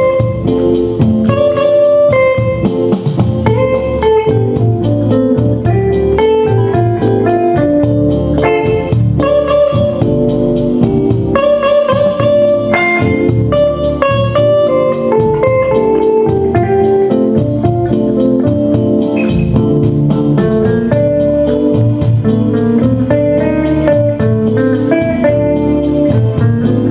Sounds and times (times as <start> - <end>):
Guitar: 0.0 - 26.9
Inside, small room: 0.0 - 26.9.